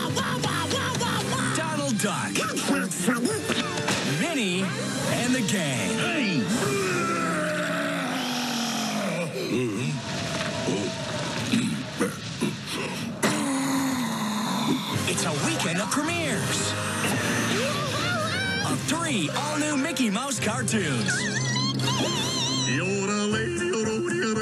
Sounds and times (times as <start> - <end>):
Music: 0.0 - 8.2, 9.2 - 24.4.